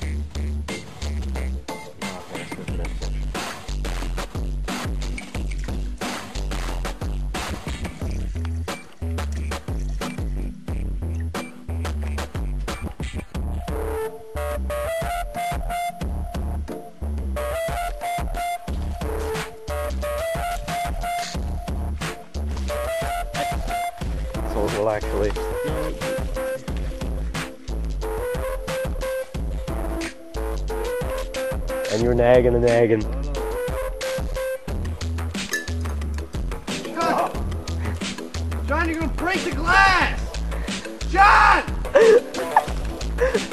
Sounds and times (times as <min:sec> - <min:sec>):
Music: 0:00.0 - 0:43.5
Speech: 0:24.5 - 0:26.0, 0:31.9 - 0:33.4, 0:38.7 - 0:40.2.